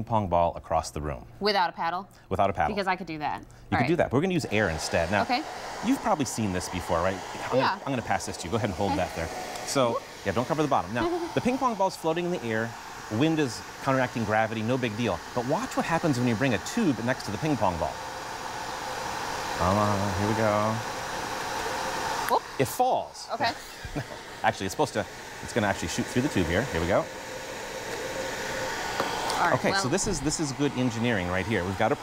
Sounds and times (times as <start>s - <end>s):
Speech: 3.7s - 18.0s, 19.6s - 20.8s, 22.6s - 23.6s, 24.5s - 27.1s, 29.4s - 32.0s.